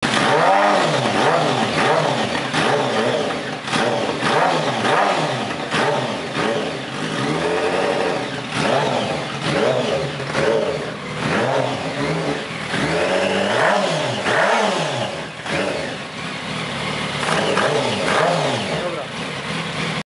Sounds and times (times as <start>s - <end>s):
Accelerating, revving, vroom: 0.0s - 16.0s, 17.2s - 19.0s
Car: 0.0s - 20.0s
Medium engine (mid frequency): 0.0s - 20.0s
Speech: 18.7s - 19.2s.